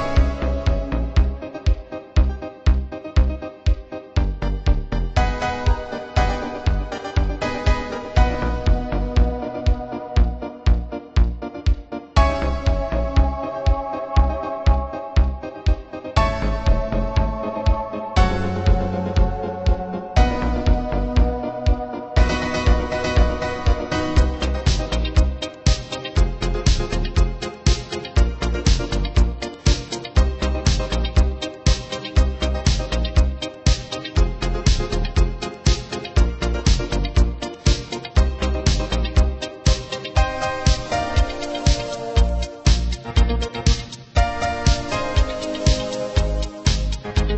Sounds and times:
Music: 0:00.0 - 0:47.3.

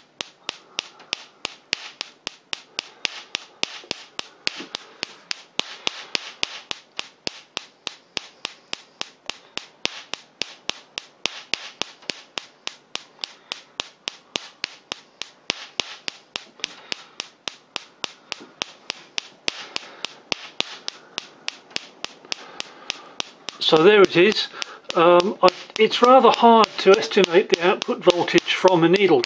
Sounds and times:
Speech: 0:23.6 - 0:29.2.

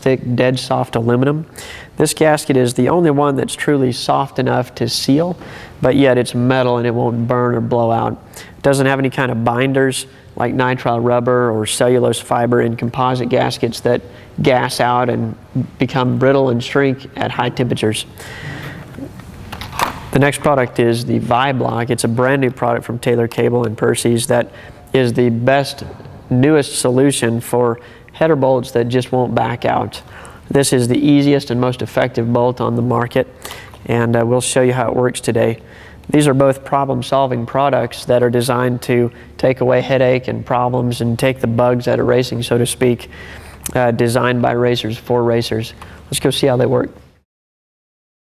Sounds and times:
Speech: 0:00.0 - 0:18.2, 0:20.1 - 0:33.3, 0:33.9 - 0:47.0.

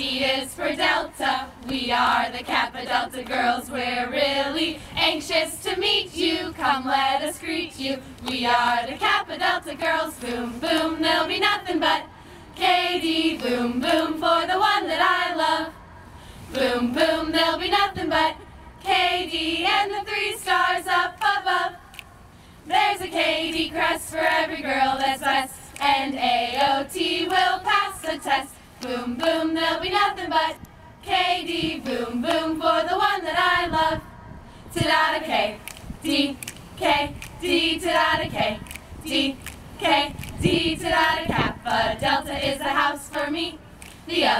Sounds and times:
Mantra: 0:00.0 - 0:15.9, 0:16.5 - 0:21.9, 0:22.7 - 0:44.3.

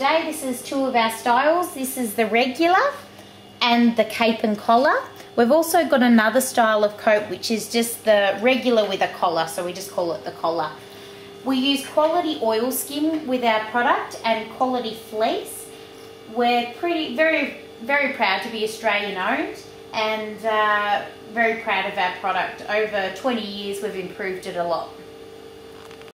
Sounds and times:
Speech: 0:00.0 - 0:10.8, 0:11.5 - 0:15.7, 0:16.3 - 0:25.0.

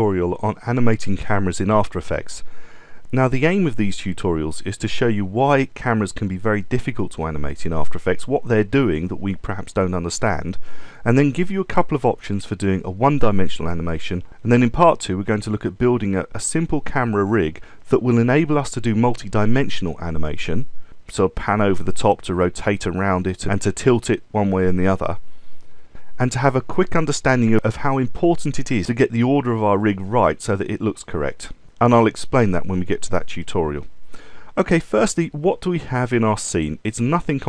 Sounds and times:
Speech: 0:00.0 - 0:02.5, 0:03.1 - 0:25.2, 0:26.2 - 0:33.9, 0:34.6 - 0:37.4.

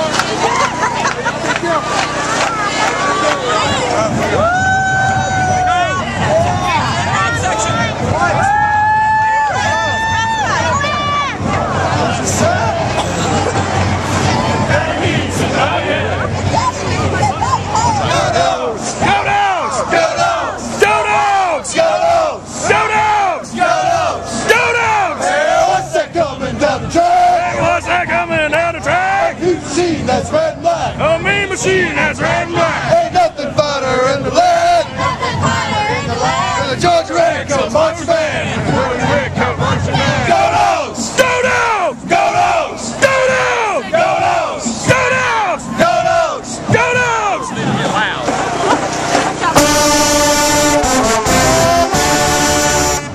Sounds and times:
Music: 0:03.5 - 0:53.1.

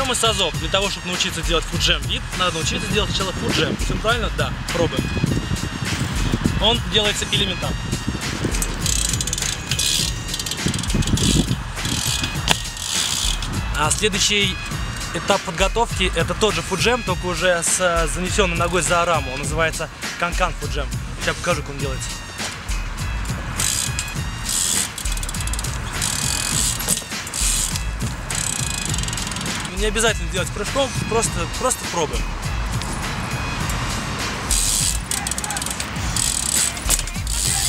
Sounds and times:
Speech: 0:00.0 - 0:05.1, 0:06.6 - 0:07.8, 0:13.8 - 0:14.6, 0:15.2 - 0:22.1, 0:29.7 - 0:32.2
Music: 0:00.0 - 0:37.6.

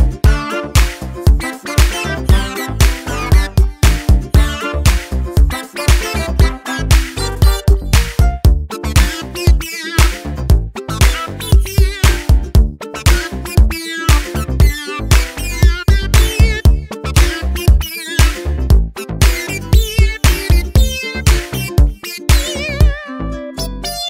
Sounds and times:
Music: 0:00.0 - 0:24.0.

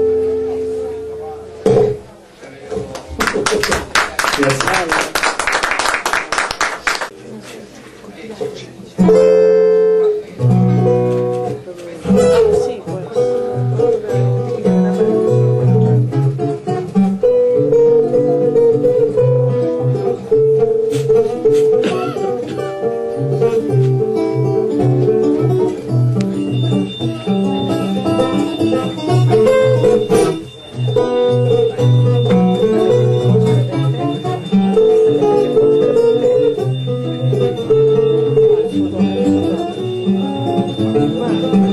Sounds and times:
Acoustic guitar: 0:00.0 - 0:41.7.

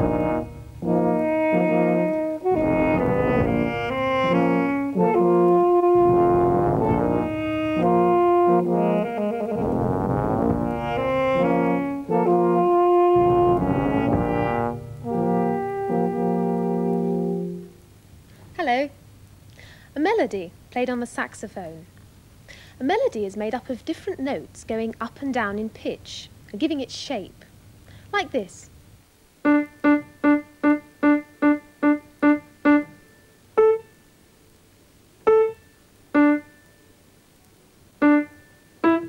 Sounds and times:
Music: 0:00.0 - 0:17.9, 0:29.4 - 0:34.2, 0:35.3 - 0:37.1, 0:38.0 - 0:39.0.

